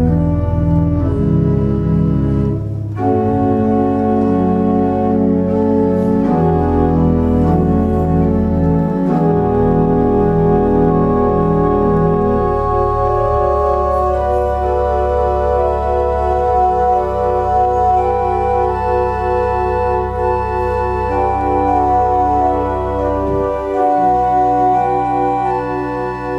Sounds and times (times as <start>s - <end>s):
Electric piano: 0.0s - 26.3s
Hammond organ: 0.0s - 26.3s.